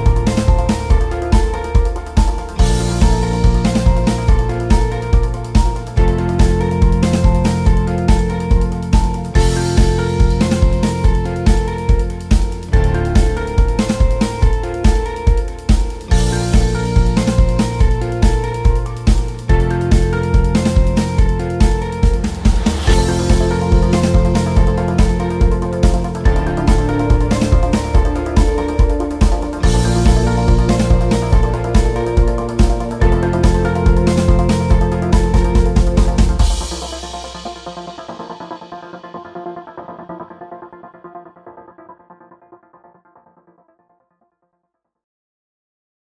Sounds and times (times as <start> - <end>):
Background music: 0.0 - 44.2.